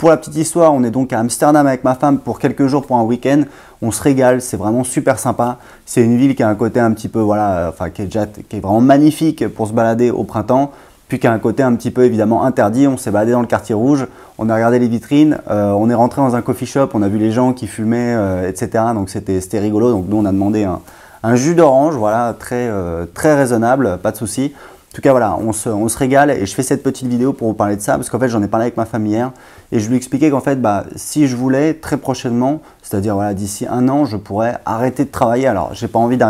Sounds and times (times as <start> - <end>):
Speech: 0.0 - 36.3.